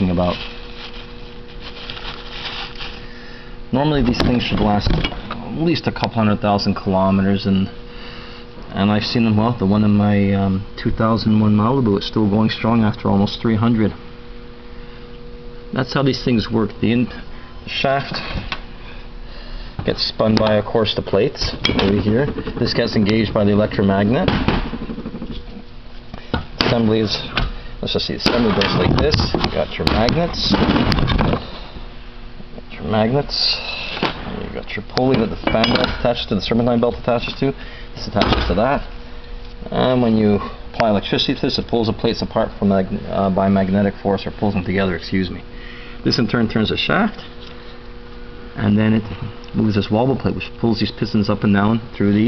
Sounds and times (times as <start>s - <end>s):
Speech: 0.0s - 0.4s, 3.7s - 7.8s, 8.7s - 14.0s, 15.7s - 18.4s, 19.8s - 24.4s, 26.6s - 30.7s, 32.7s - 38.9s, 39.6s - 45.4s, 46.0s - 47.2s, 48.6s - 52.2s.